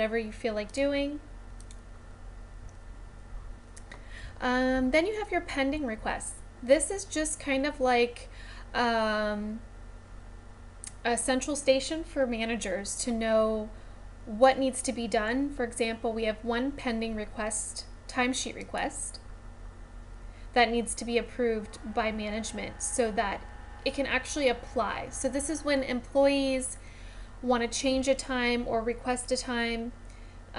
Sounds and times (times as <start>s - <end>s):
Speech: 0.0s - 1.3s, 4.4s - 9.6s, 10.9s - 19.2s, 20.5s - 26.8s, 27.4s - 30.0s.